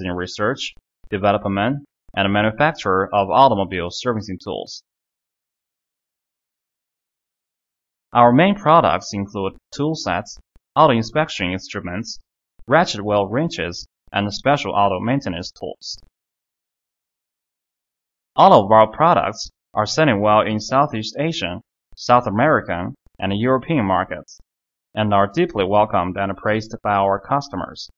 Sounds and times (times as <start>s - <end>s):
Speech: 0.0s - 4.9s, 8.2s - 16.1s, 18.4s - 24.4s, 25.0s - 27.9s.